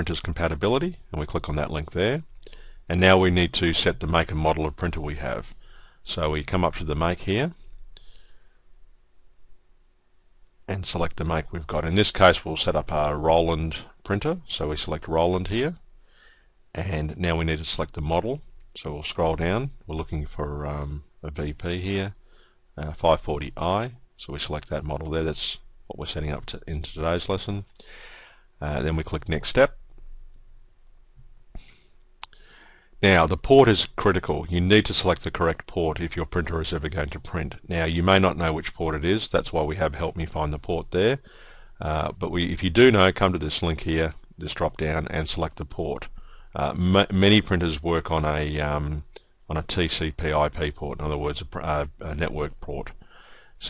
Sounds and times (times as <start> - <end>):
Speech: 0.0 - 2.3, 2.9 - 7.6, 10.7 - 15.8, 16.8 - 22.2, 22.8 - 27.7, 28.6 - 29.8, 33.0 - 41.2, 41.8 - 53.0.